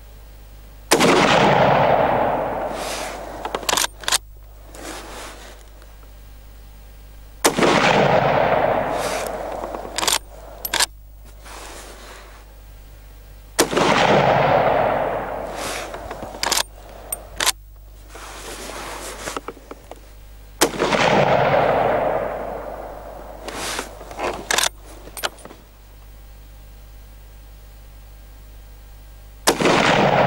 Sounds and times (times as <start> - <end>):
Outside, rural or natural: 0.0 - 30.2.